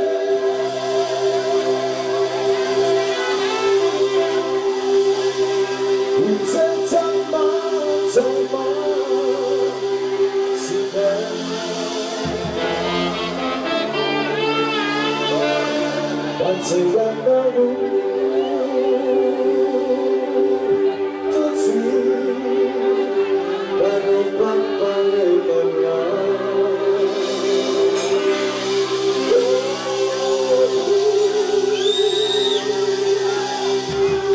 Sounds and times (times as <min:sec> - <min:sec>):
Music: 0:00.0 - 0:34.3.